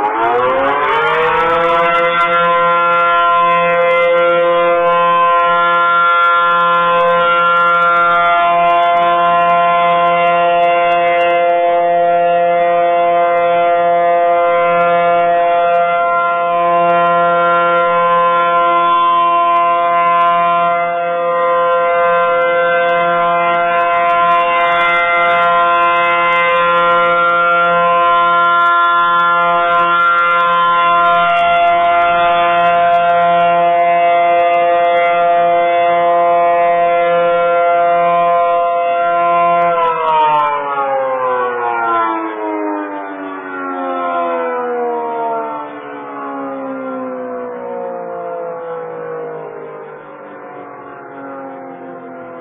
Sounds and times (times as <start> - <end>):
Civil defense siren: 0.0 - 52.4.